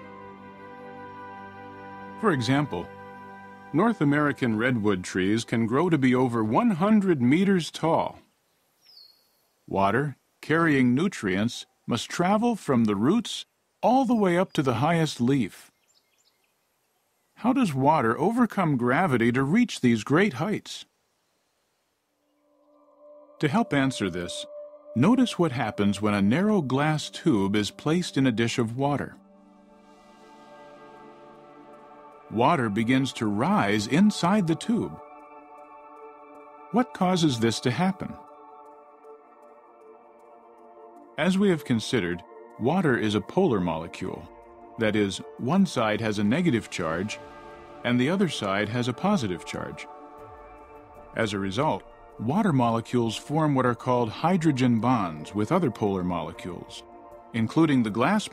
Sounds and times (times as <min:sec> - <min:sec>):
Music: 0:00.0 - 0:07.8, 0:22.2 - 0:58.3
Speech: 0:02.2 - 0:02.9, 0:03.8 - 0:08.2, 0:09.7 - 0:15.7, 0:17.4 - 0:20.9, 0:23.4 - 0:29.2, 0:32.3 - 0:35.0, 0:36.8 - 0:38.2, 0:41.2 - 0:47.2, 0:47.8 - 0:49.9, 0:51.2 - 0:56.8, 0:57.4 - 0:58.3.